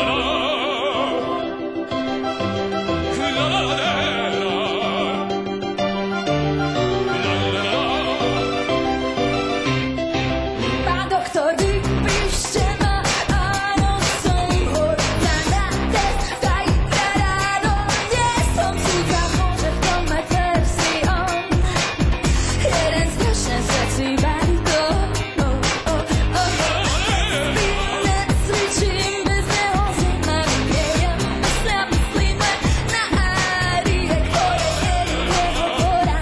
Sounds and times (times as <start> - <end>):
Music: 0.0 - 36.2.